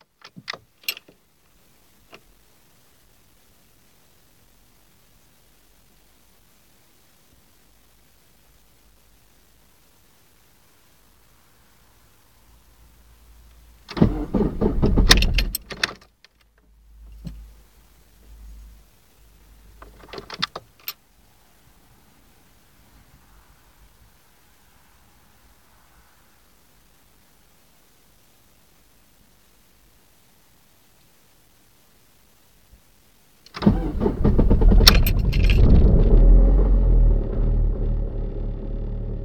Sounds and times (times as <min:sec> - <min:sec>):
Car: 0:11.7 - 0:16.0, 0:33.5 - 0:39.2
Medium engine (mid frequency): 0:12.0 - 0:16.0, 0:33.5 - 0:39.2
Engine starting: 0:13.9 - 0:16.0, 0:33.5 - 0:39.2.